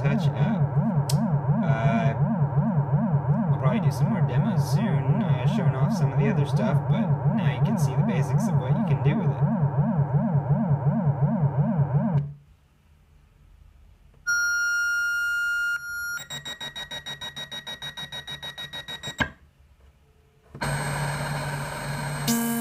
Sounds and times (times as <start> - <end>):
Speech: 0.0 - 0.6, 1.6 - 2.2, 3.5 - 9.4
Synthesizer: 0.0 - 12.3
Inside, small room: 0.0 - 22.6.